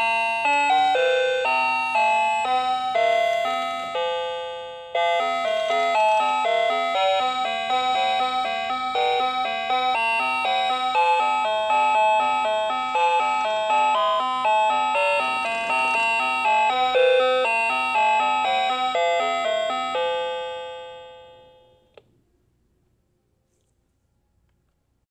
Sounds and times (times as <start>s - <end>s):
Music: 0.0s - 21.4s.